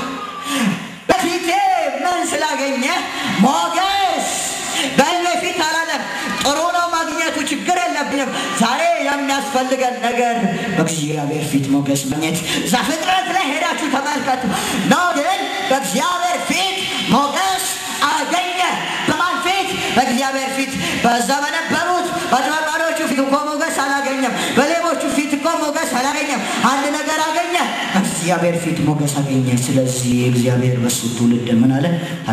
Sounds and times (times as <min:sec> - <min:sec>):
Speech: 0:01.1 - 0:32.3.